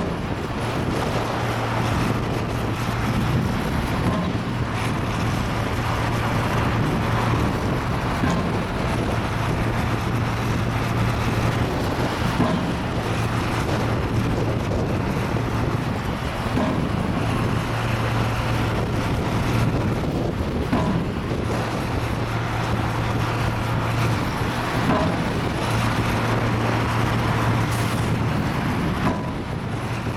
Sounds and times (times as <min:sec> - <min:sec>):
Truck: 0:00.0 - 0:30.1.